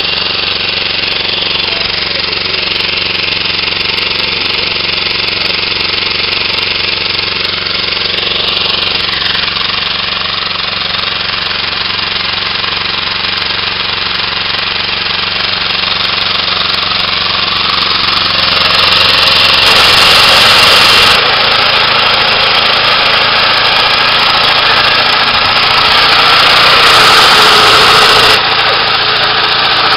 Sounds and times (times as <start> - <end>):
Lawn mower: 0.0 - 29.9.